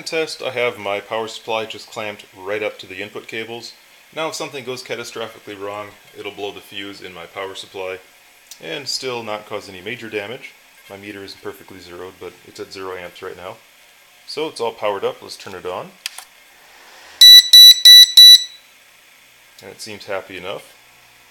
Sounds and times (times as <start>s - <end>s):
Speech: 0.0s - 13.6s, 14.3s - 16.0s, 19.6s - 20.8s.